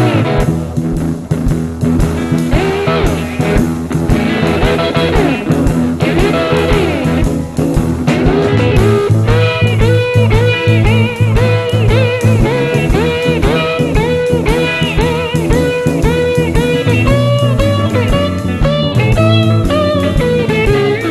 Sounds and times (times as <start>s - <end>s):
Blues: 0.0s - 21.1s
Psychedelic rock: 0.0s - 21.1s.